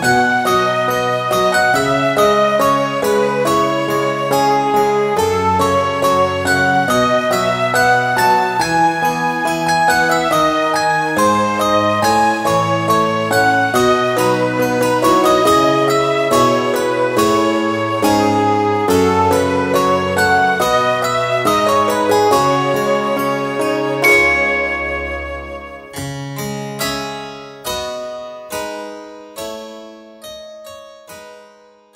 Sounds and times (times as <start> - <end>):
Piano: 0.0 - 31.9.